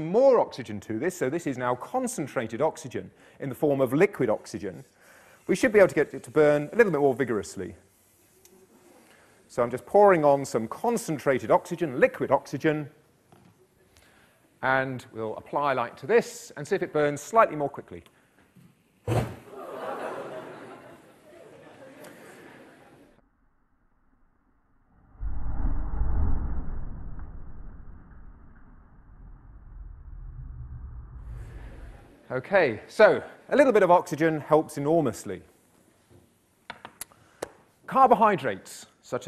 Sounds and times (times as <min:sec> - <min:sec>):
Speech: 0:00.0 - 0:04.9, 0:05.5 - 0:07.8, 0:09.5 - 0:13.0, 0:14.6 - 0:18.1, 0:32.3 - 0:35.5, 0:37.9 - 0:39.2.